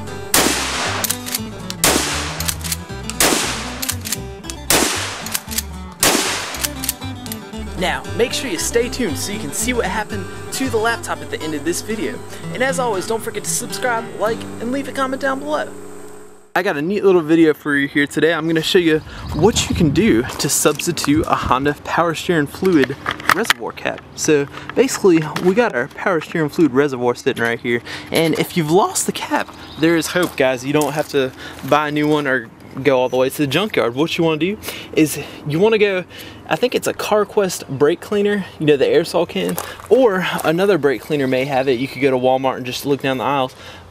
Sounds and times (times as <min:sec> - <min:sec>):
Outside, rural or natural: 0:00.0 - 0:43.9
Speech: 0:07.8 - 0:15.7, 0:16.6 - 0:43.6.